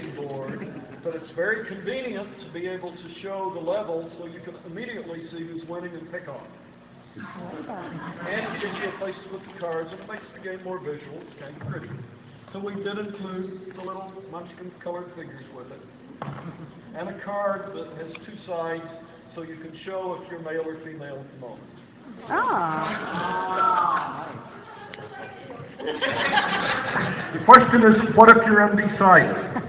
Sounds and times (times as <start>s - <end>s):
Snicker: 0.4s - 1.1s, 22.8s - 27.5s.